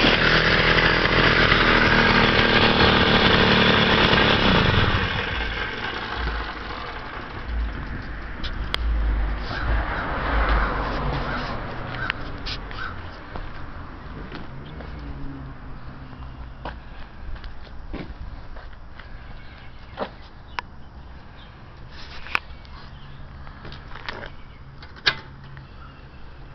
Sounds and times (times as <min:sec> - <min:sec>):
Motorcycle: 0:00.0 - 0:26.5
Outside, urban or manmade: 0:00.0 - 0:26.5.